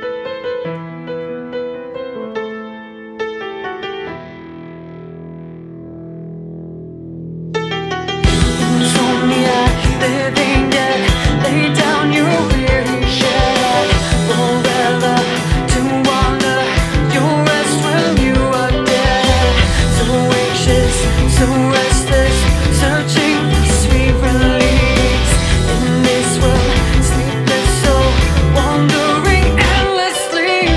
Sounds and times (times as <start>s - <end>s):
Music: 0.0s - 30.7s.